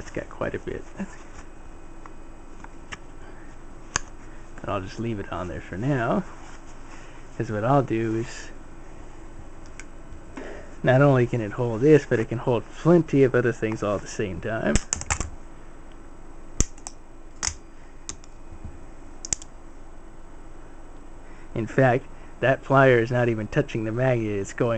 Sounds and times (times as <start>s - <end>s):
Speech: 0.0s - 1.2s, 4.6s - 6.3s, 7.4s - 8.6s, 10.8s - 14.8s, 21.6s - 24.7s.